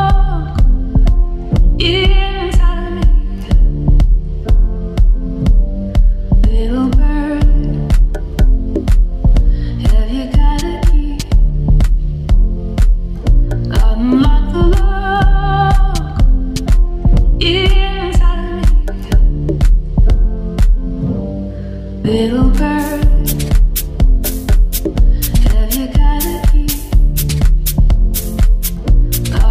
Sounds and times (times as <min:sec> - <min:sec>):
Music: 0:00.0 - 0:29.5.